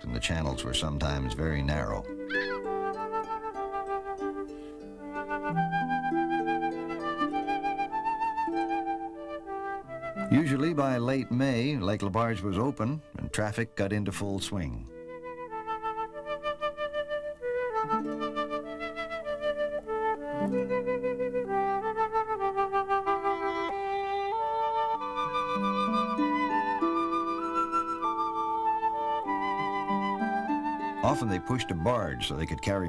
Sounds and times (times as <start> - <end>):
Flute: 0.0 - 13.0, 14.9 - 32.8.